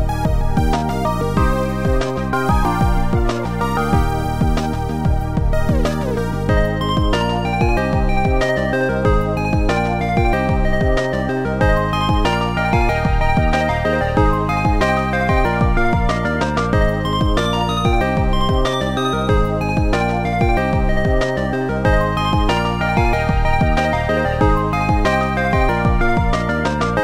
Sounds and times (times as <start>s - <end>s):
Video game music: 0.0s - 27.0s.